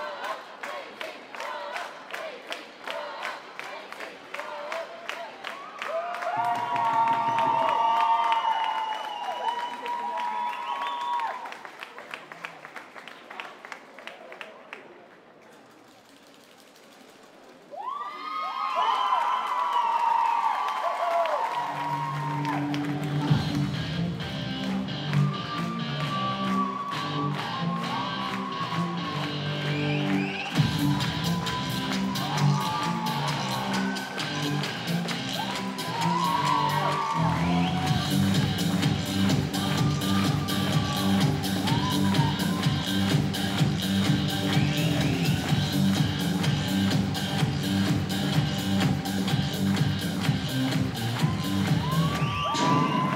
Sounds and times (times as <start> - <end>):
Music: 21.5 - 53.1.